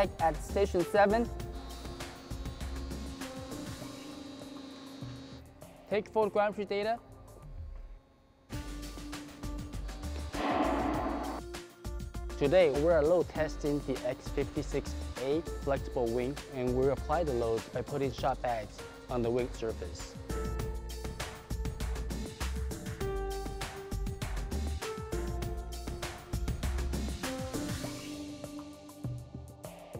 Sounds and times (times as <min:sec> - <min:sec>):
Speech: 0:00.0 - 0:01.3, 0:05.9 - 0:07.0, 0:12.4 - 0:20.1
Music: 0:00.0 - 0:29.9.